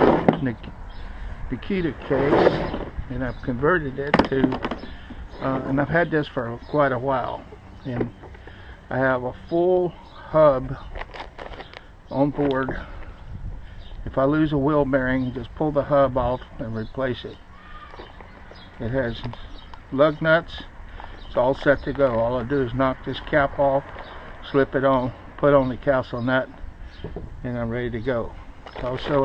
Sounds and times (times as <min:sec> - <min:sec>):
Speech: 0:00.3 - 0:00.7, 0:01.5 - 0:04.6, 0:05.4 - 0:08.2, 0:08.9 - 0:10.9, 0:12.1 - 0:12.9, 0:14.1 - 0:17.4, 0:18.8 - 0:20.7, 0:21.3 - 0:26.5, 0:27.4 - 0:29.2.